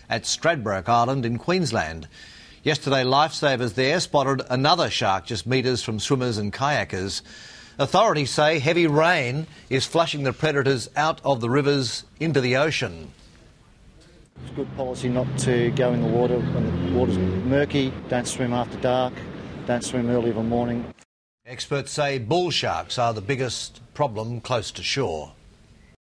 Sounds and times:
Speech: 0:00.1 - 0:07.2, 0:07.8 - 0:25.4.

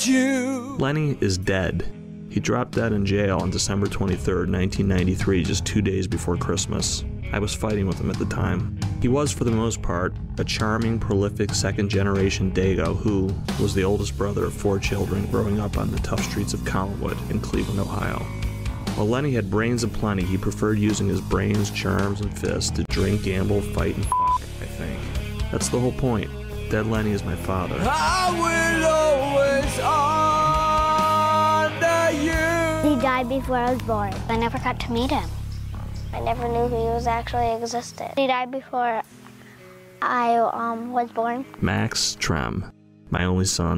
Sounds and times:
Soundtrack music: 0:00.0 - 0:42.5
Background music: 0:00.0 - 0:43.7
Speech: 0:00.8 - 0:18.3, 0:19.0 - 0:28.6, 0:36.2 - 0:39.0, 0:40.0 - 0:43.7.

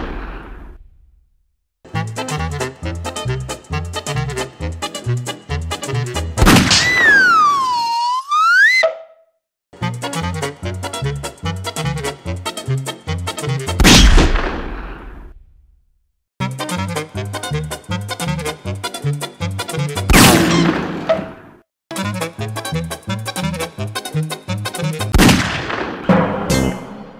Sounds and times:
Gunshot, gunfire: 0:00.0 - 0:00.8, 0:06.4 - 0:07.5, 0:13.8 - 0:15.5, 0:20.1 - 0:21.4, 0:25.1 - 0:26.7
Music: 0:01.9 - 0:06.4, 0:09.8 - 0:13.8, 0:16.4 - 0:20.1, 0:21.9 - 0:25.2, 0:26.4 - 0:26.9.

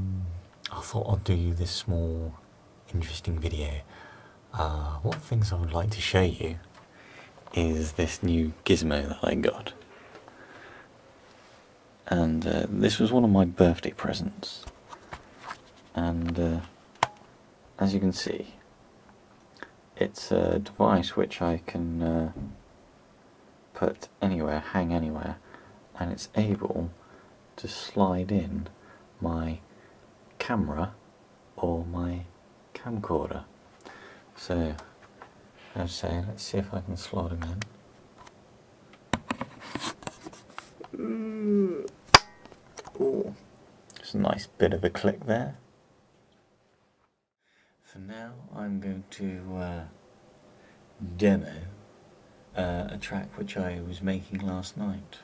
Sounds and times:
Speech: 0:00.0 - 0:03.9, 0:04.5 - 0:06.7, 0:07.5 - 0:09.8, 0:12.0 - 0:14.7, 0:15.9 - 0:16.8, 0:17.8 - 0:18.6, 0:20.0 - 0:22.6, 0:23.7 - 0:25.4, 0:26.0 - 0:27.0, 0:27.6 - 0:29.7, 0:30.4 - 0:31.0, 0:31.6 - 0:33.5, 0:34.4 - 0:34.9, 0:35.7 - 0:37.7, 0:42.9 - 0:45.6, 0:47.8 - 0:50.0, 0:51.0 - 0:51.8, 0:52.6 - 0:55.2.

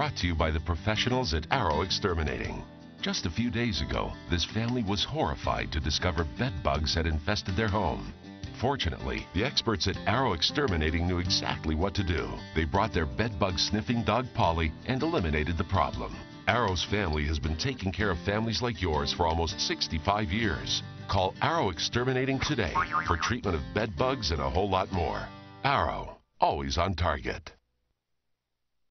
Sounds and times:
Music: 0:00.0 - 0:26.2
Speech: 0:00.0 - 0:27.6.

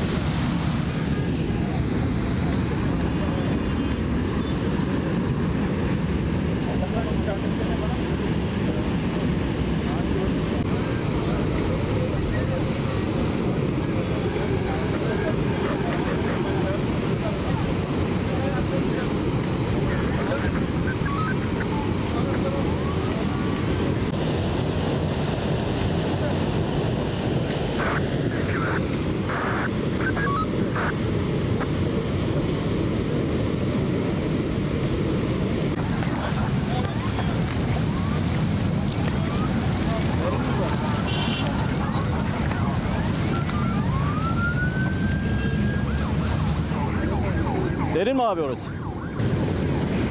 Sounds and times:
Speech: 0:06.7 - 0:09.1, 0:09.8 - 0:23.8, 0:36.2 - 0:43.7, 0:46.8 - 0:48.8
Bus: 0:08.1 - 0:27.7, 0:31.2 - 0:47.9.

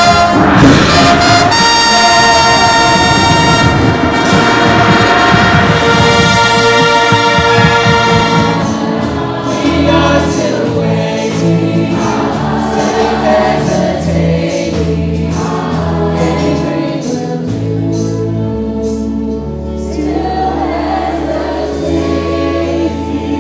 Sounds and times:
Choir: 0:00.0 - 0:23.4
Vocal music: 0:00.0 - 0:23.4
Male singing: 0:09.5 - 0:13.0.

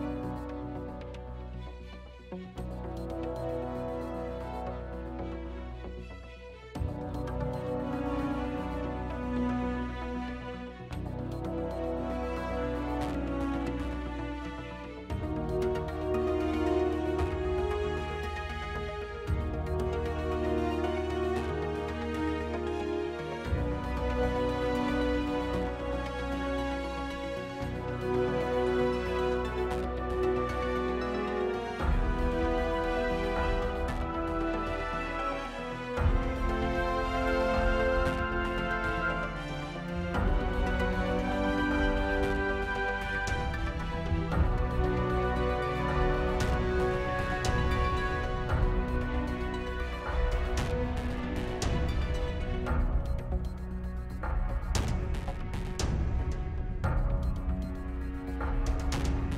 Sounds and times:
Music: 0:00.0 - 0:59.3.

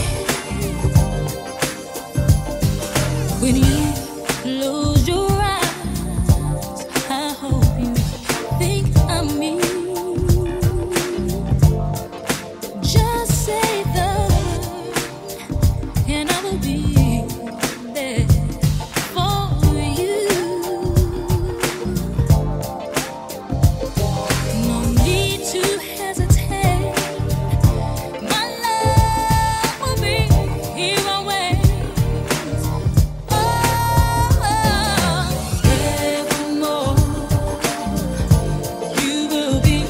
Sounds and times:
Rhythm and blues: 0:00.0 - 0:39.8.

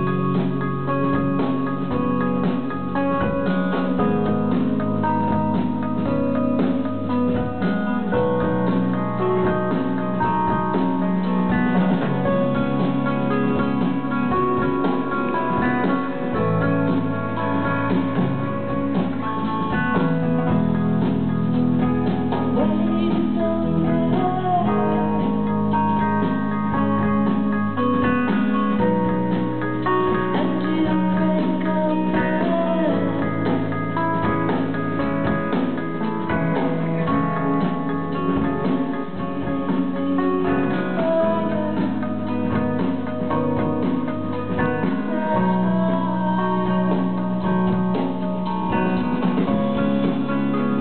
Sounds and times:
Music: 0:00.0 - 0:50.8.

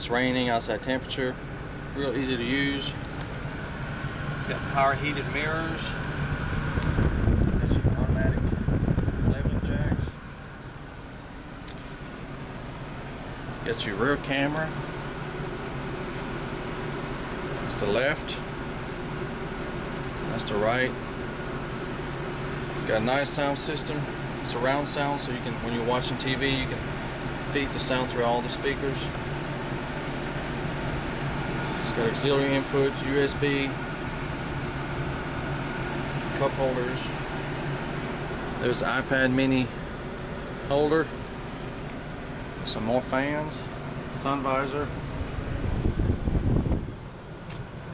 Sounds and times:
Speech: 0:00.0 - 0:01.4, 0:02.0 - 0:03.0, 0:04.4 - 0:06.0, 0:07.6 - 0:08.5, 0:09.2 - 0:10.2, 0:13.6 - 0:14.8, 0:17.7 - 0:18.5, 0:20.3 - 0:21.0, 0:22.8 - 0:26.9, 0:27.5 - 0:29.2, 0:31.8 - 0:33.8, 0:36.3 - 0:37.2, 0:38.6 - 0:39.8, 0:40.7 - 0:41.2, 0:42.6 - 0:44.9
Outside, urban or manmade: 0:00.0 - 0:47.9.

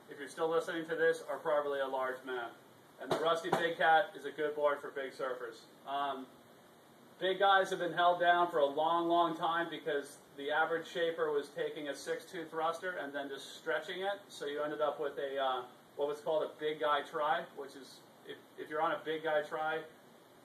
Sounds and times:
Speech: 0:00.0 - 0:06.4, 0:07.2 - 0:20.0.

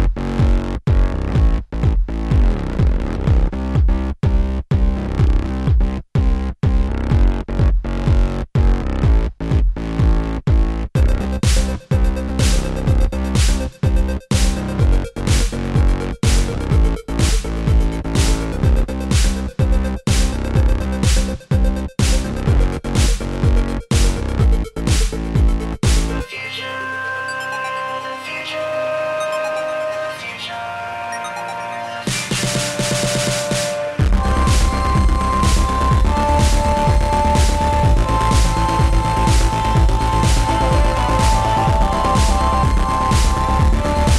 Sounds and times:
Disco: 0:11.0 - 0:44.1.

